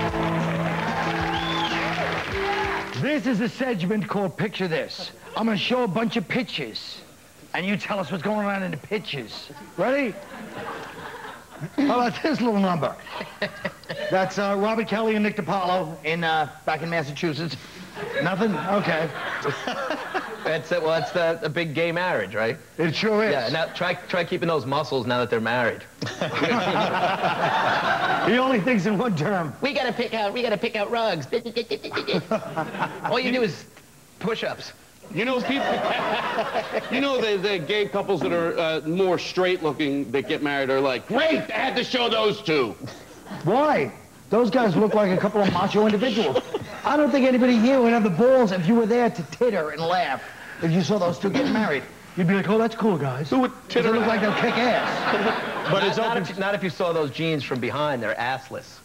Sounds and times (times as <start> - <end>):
Speech: 28.3 - 31.7, 36.8 - 58.8.